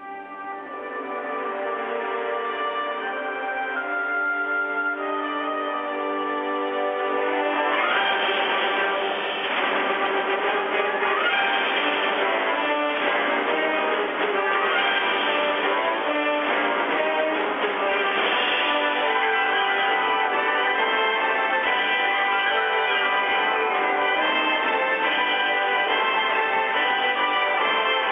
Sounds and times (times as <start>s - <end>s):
Music: 0.0s - 28.1s.